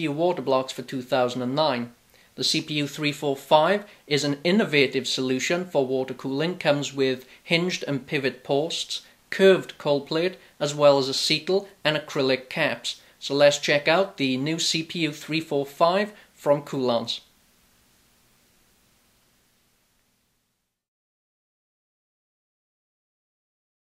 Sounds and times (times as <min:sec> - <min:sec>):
Speech: 0:00.0 - 0:17.3.